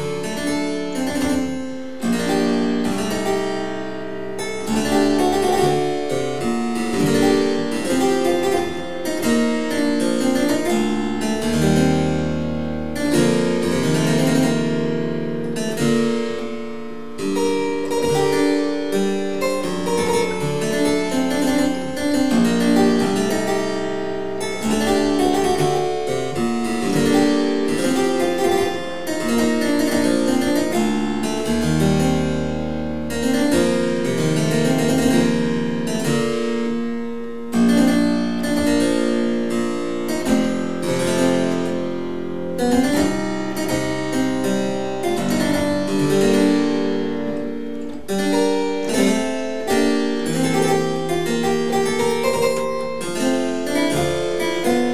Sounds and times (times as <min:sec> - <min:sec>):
Harpsichord: 0:00.0 - 0:54.9.